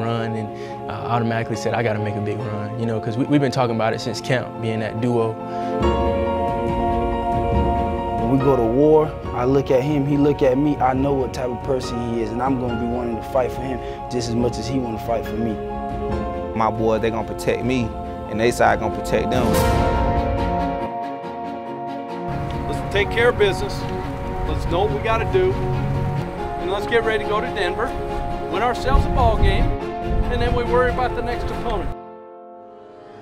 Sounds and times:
Speech: 0.0 - 5.4, 8.2 - 15.6, 16.6 - 19.6, 28.5 - 29.7, 30.3 - 32.0
Music: 0.0 - 33.2.

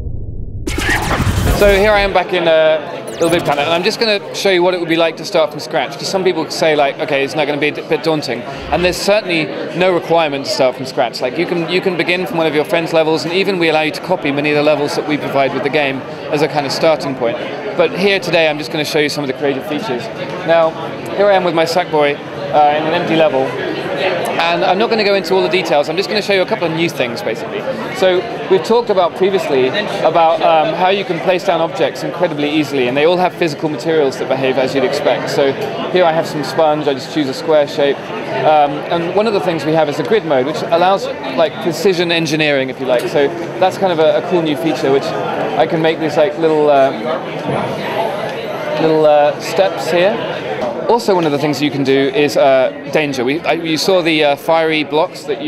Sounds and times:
Speech: 1.5 - 55.4.

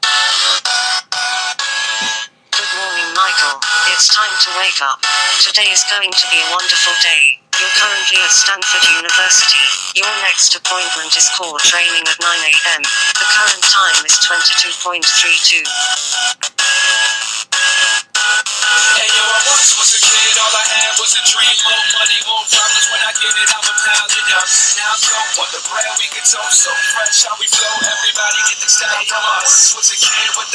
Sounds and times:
Music: 0.0 - 30.5.

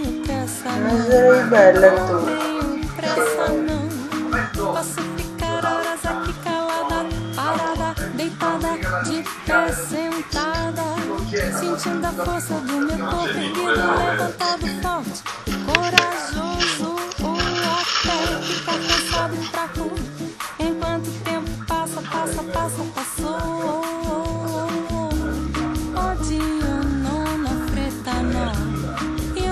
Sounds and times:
Music: 0.0 - 29.5
Speech: 0.5 - 20.0, 21.8 - 25.5.

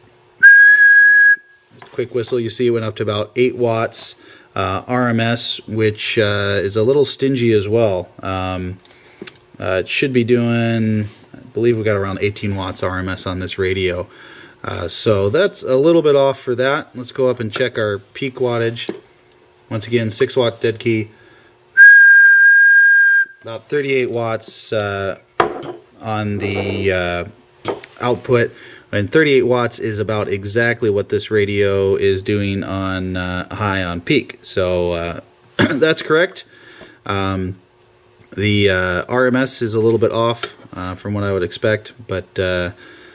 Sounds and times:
Whistling: 0.4 - 1.7, 21.8 - 23.5
Speech: 1.8 - 8.8, 9.6 - 19.0, 19.7 - 21.2, 23.4 - 25.2, 26.0 - 36.5, 37.1 - 37.6, 38.3 - 42.8.

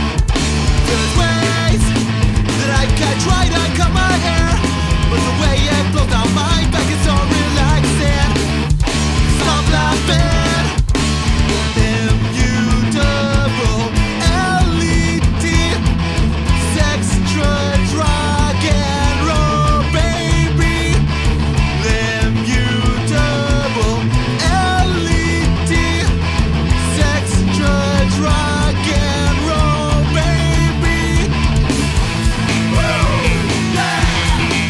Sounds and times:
Rock and roll: 0.0 - 34.6.

